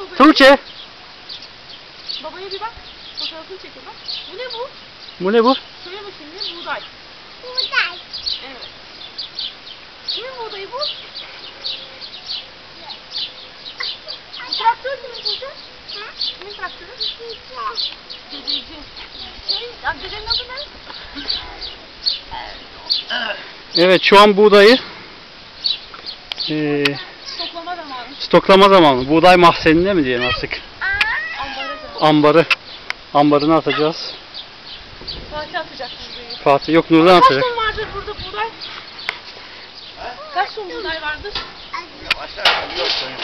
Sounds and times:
Bird: 0:06.2 - 0:23.3.

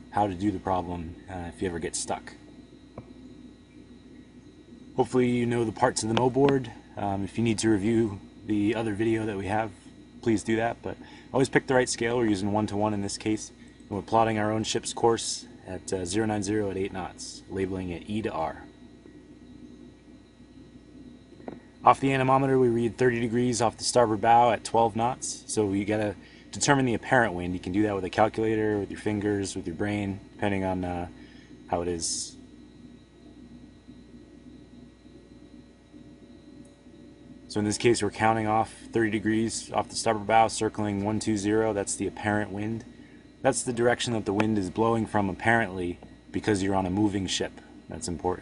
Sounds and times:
Speech: 0:00.1 - 0:02.4, 0:05.0 - 0:18.7, 0:21.8 - 0:32.4, 0:37.5 - 0:48.4.

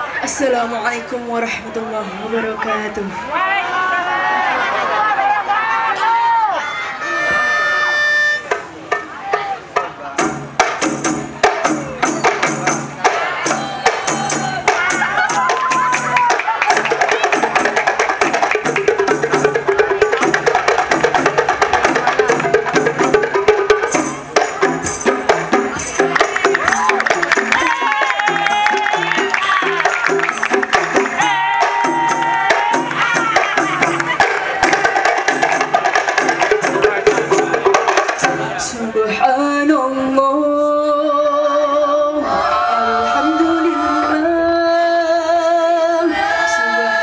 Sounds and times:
Music: 0:07.0 - 0:47.0.

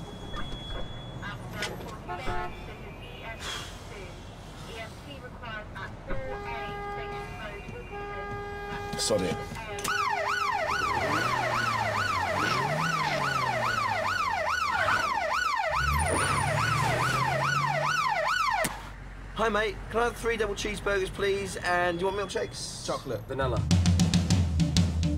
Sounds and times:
Emergency vehicle: 0:00.0 - 0:02.7, 0:09.8 - 0:19.3
Car: 0:00.0 - 0:23.6.

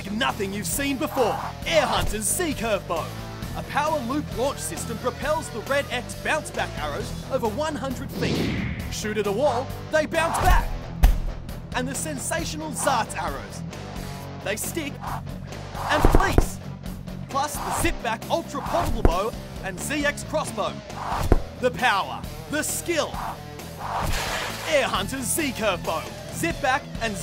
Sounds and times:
Arrow: 0:08.2 - 0:08.9, 0:10.4 - 0:11.3, 0:15.8 - 0:16.6, 0:17.7 - 0:18.0, 0:18.7 - 0:19.2, 0:21.0 - 0:21.5, 0:23.8 - 0:24.7.

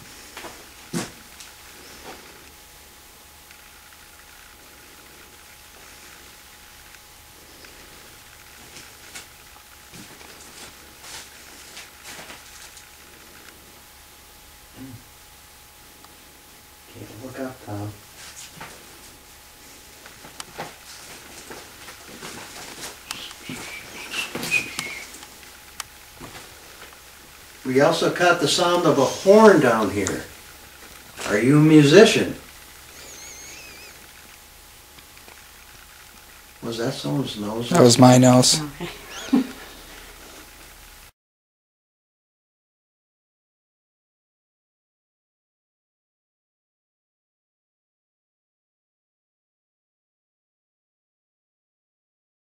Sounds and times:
Whistling: 0:23.2 - 0:25.2, 0:33.0 - 0:34.0.

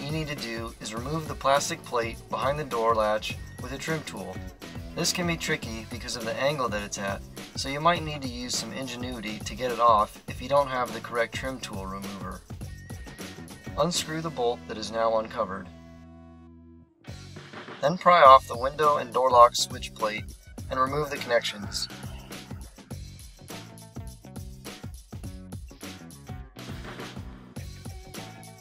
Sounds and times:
Speech: 0:00.0 - 0:04.4, 0:05.0 - 0:12.4, 0:13.8 - 0:15.7, 0:17.8 - 0:22.0
Music: 0:00.0 - 0:28.6.

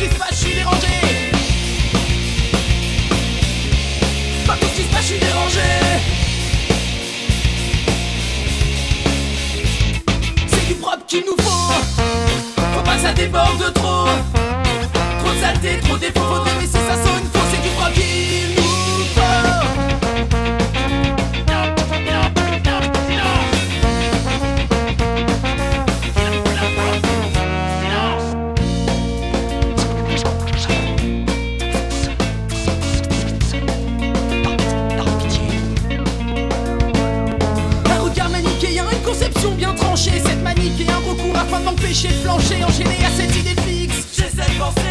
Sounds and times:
Music: 0:00.0 - 0:44.9.

